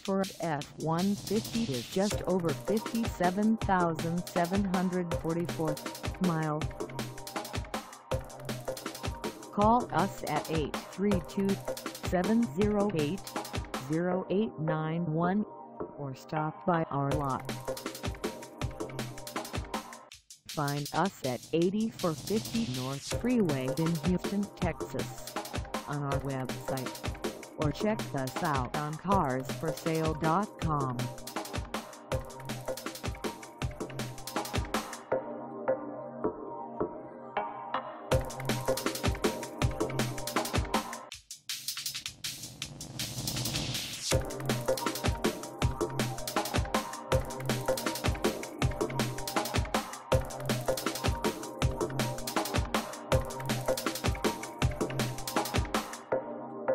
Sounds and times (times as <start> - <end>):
Speech: 0.0 - 6.7, 9.6 - 17.4, 20.6 - 25.3, 25.9 - 26.9, 27.6 - 31.1
Music: 0.0 - 56.7.